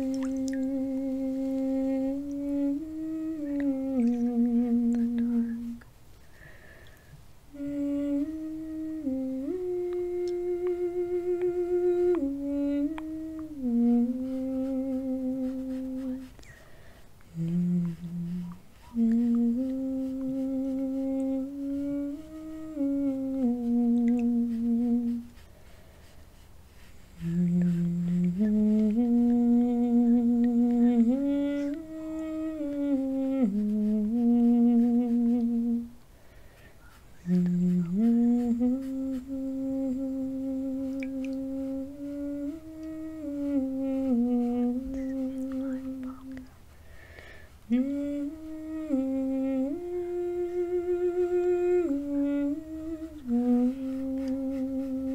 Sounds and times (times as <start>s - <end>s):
Humming: 0.0s - 25.7s, 26.8s - 55.1s.